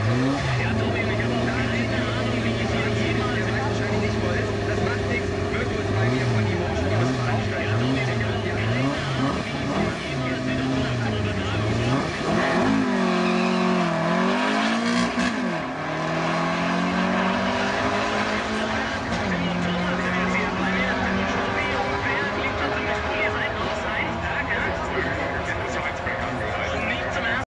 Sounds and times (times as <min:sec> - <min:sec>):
Speech: 0:00.3 - 0:12.5, 0:16.8 - 0:27.5.